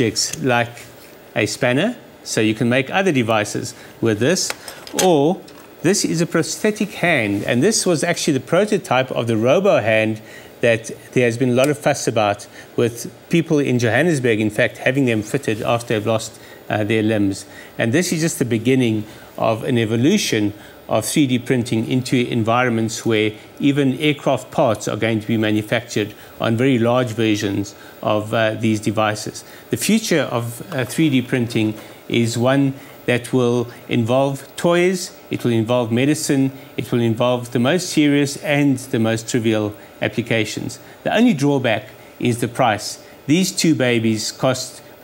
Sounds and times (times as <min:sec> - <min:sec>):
Speech: 0:00.0 - 0:45.0.